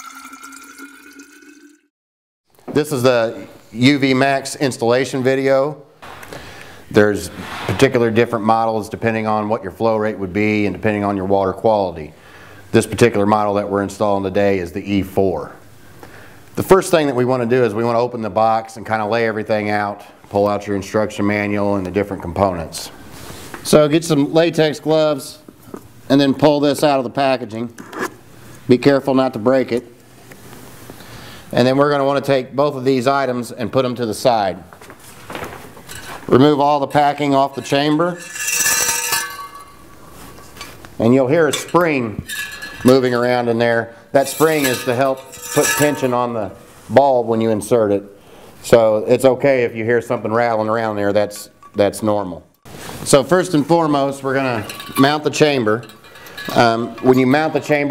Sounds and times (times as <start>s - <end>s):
Speech: 2.7s - 5.8s, 6.9s - 15.6s, 16.6s - 23.0s, 23.6s - 25.5s, 26.1s - 27.8s, 28.7s - 29.9s, 31.5s - 34.7s, 36.3s - 38.2s, 41.0s - 57.9s.